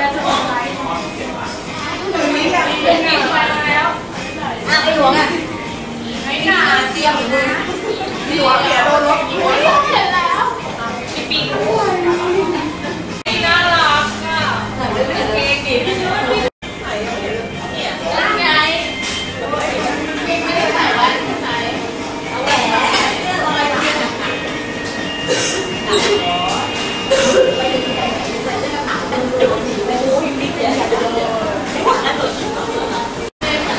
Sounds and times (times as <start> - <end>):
Music: 0.0 - 33.7.